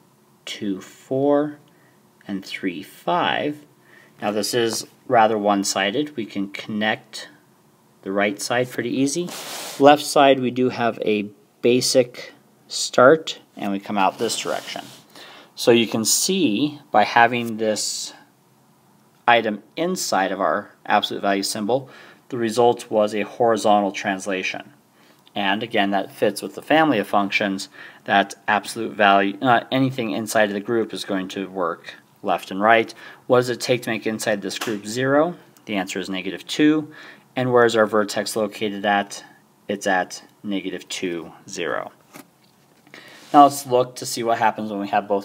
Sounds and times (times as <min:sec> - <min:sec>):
Speech: 0:00.4 - 0:07.4, 0:08.0 - 0:15.0, 0:15.6 - 0:18.3, 0:19.2 - 0:42.0, 0:43.3 - 0:45.2.